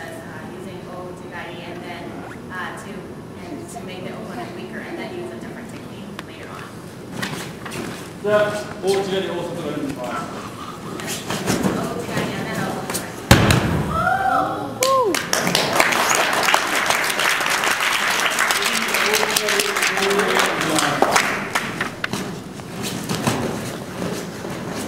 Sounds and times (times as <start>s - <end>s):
Thump, thud: 13.3s - 14.0s
Applause: 14.8s - 22.1s.